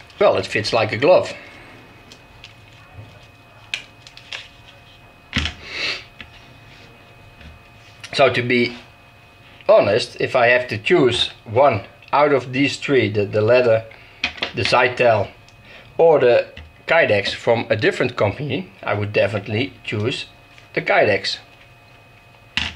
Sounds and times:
Speech: 0.2s - 1.4s, 8.1s - 8.8s, 9.7s - 13.9s, 14.6s - 15.3s, 16.0s - 21.5s.

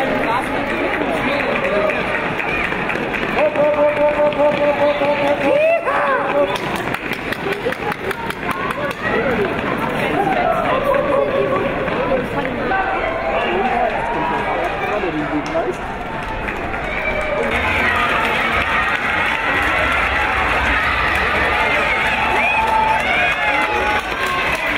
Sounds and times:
Speech: 0.0s - 15.8s
Outside, urban or manmade: 0.0s - 24.7s
Run: 0.0s - 24.7s.

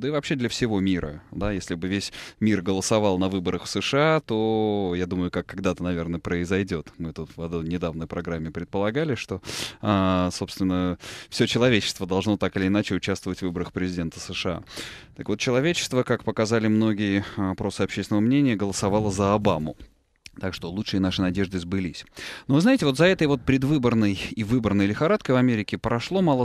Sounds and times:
Inside, small room: 0.0s - 26.4s
Speech: 0.0s - 26.4s.

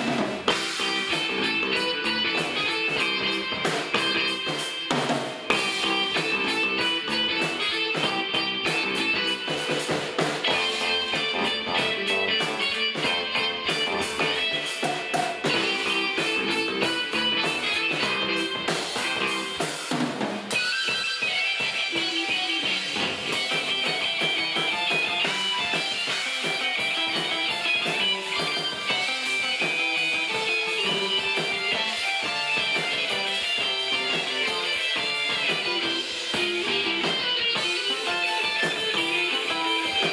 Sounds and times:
Drum: 0.0s - 40.1s
Drum kit: 0.0s - 40.1s.

